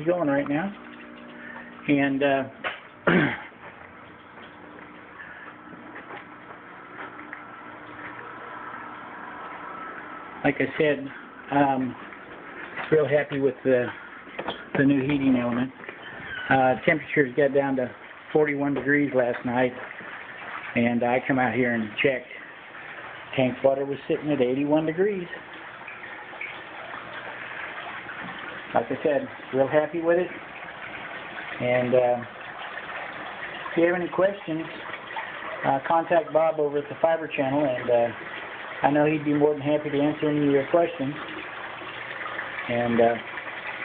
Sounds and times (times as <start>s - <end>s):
Speech: 0.0s - 0.8s, 1.9s - 2.6s, 10.4s - 12.0s, 12.9s - 14.0s, 14.8s - 15.8s, 16.5s - 19.8s, 20.8s - 22.4s, 23.4s - 25.4s, 28.8s - 30.4s, 31.6s - 32.3s, 33.8s - 34.8s, 35.6s - 38.2s, 38.8s - 41.2s, 42.7s - 43.3s.